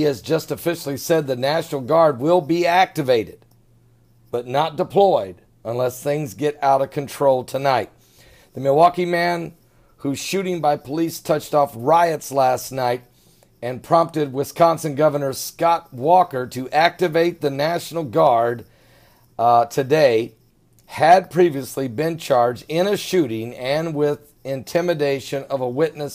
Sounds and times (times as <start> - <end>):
Speech: 0.0 - 3.4, 4.4 - 7.9, 8.6 - 18.6, 19.4 - 26.1.